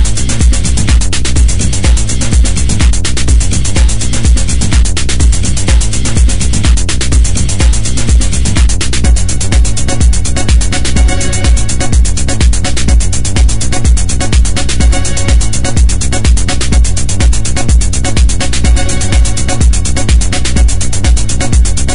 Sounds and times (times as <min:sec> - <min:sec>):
Music: 0:00.0 - 0:21.9.